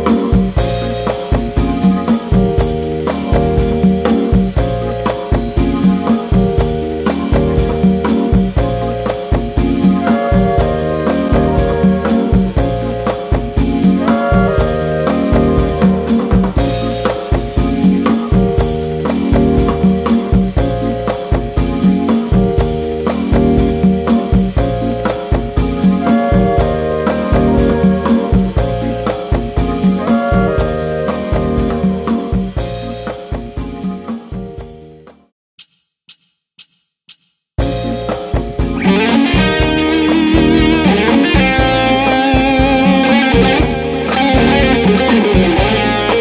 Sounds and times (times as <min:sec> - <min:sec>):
Bass guitar: 0:00.0 - 0:35.0, 0:37.6 - 0:46.2
Drum machine: 0:00.0 - 0:46.2
Heavy metal: 0:38.6 - 0:46.2.